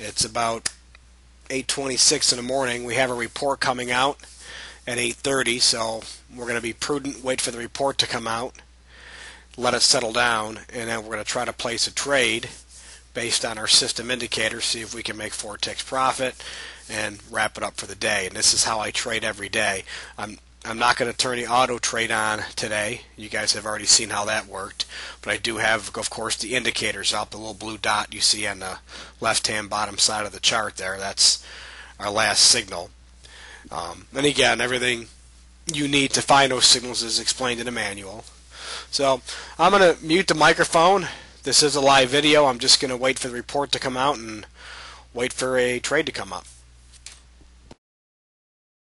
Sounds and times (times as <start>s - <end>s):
Speech: 0.0s - 0.8s, 1.5s - 4.3s, 4.9s - 8.6s, 9.6s - 12.6s, 13.2s - 32.9s, 33.7s - 38.3s, 38.9s - 44.5s, 45.2s - 46.5s.